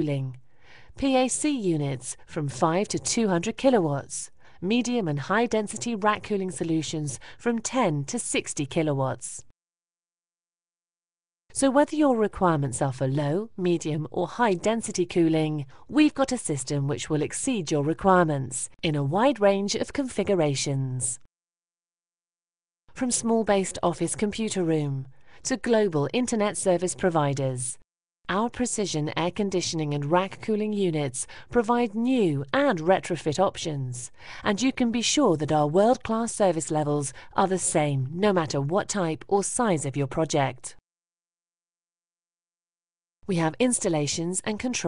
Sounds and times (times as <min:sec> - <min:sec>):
Speech: 0:00.0 - 0:00.4, 0:01.0 - 0:09.4, 0:11.6 - 0:21.2, 0:23.0 - 0:40.8, 0:43.3 - 0:44.8.